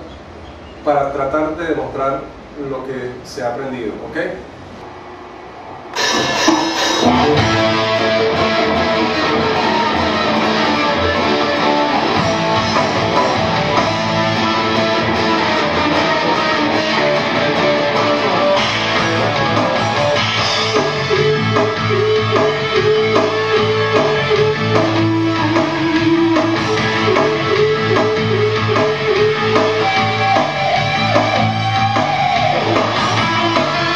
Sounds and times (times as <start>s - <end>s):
Speech: 0.8s - 4.5s
Electric guitar: 5.9s - 33.9s
Acoustic guitar: 6.0s - 33.9s
Strum: 6.0s - 33.9s.